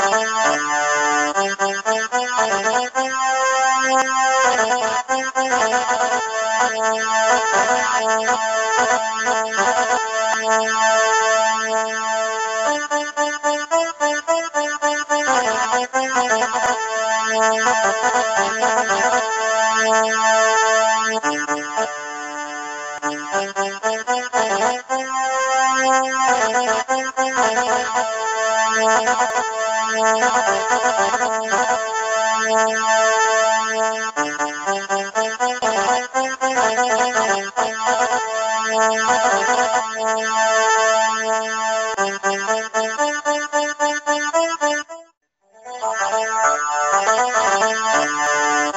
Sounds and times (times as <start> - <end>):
Music: 0.0 - 48.7.